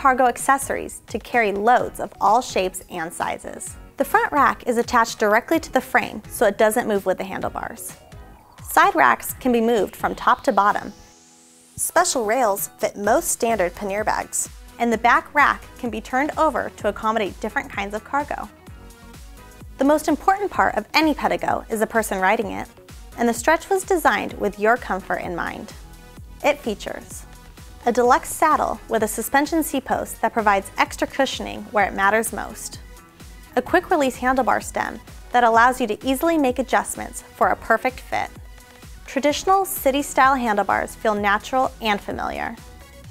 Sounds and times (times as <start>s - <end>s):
Speech: 0.0s - 8.0s, 8.7s - 10.9s, 11.8s - 18.5s, 19.8s - 25.8s, 26.4s - 27.2s, 27.8s - 32.8s, 33.6s - 38.4s, 39.1s - 42.6s
Music: 0.0s - 43.1s.